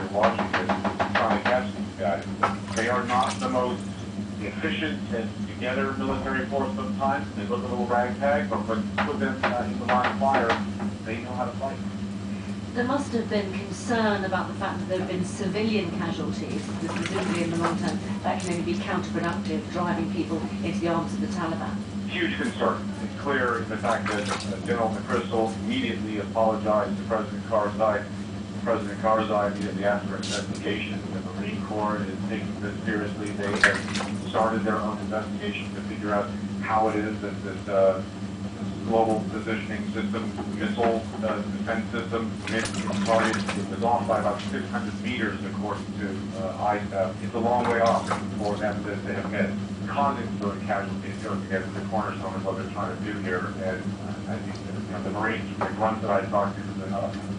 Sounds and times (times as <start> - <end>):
Speech: 0.0 - 11.8, 12.8 - 38.1, 38.8 - 57.2.